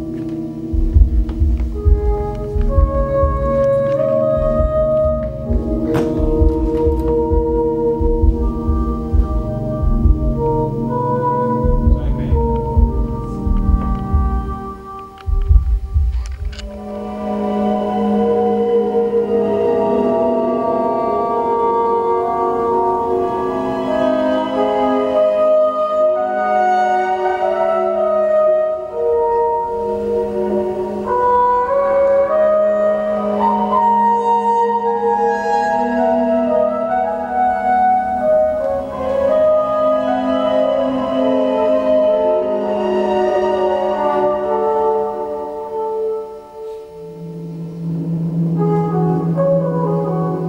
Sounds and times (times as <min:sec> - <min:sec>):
Jazz: 0:00.0 - 0:50.4.